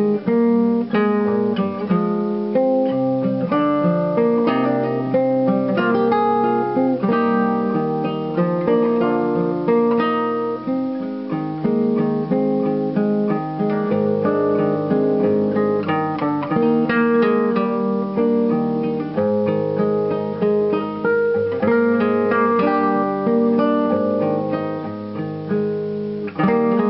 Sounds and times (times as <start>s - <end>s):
Acoustic guitar: 0.0s - 26.9s
Strum: 0.0s - 26.9s.